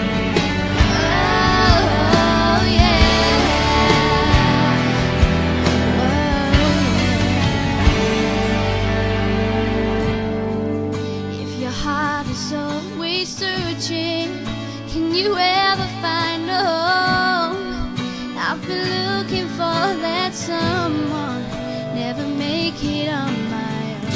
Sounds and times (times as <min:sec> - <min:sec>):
Music: 0:00.0 - 0:24.1
Female singing: 0:00.8 - 0:05.3, 0:05.9 - 0:07.5, 0:11.4 - 0:24.1.